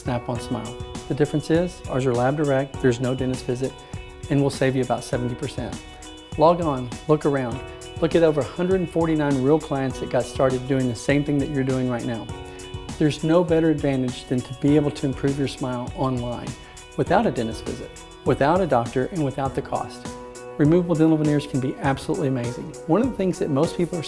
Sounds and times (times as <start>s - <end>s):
Speech: 0.0s - 5.8s, 6.4s - 12.3s, 13.0s - 24.0s
Music: 0.0s - 24.0s.